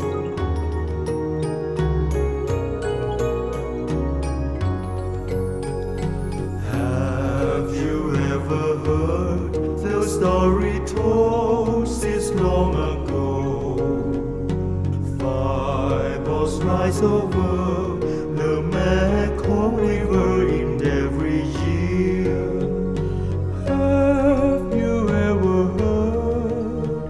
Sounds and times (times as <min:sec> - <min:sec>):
Music: 0:00.0 - 0:27.1.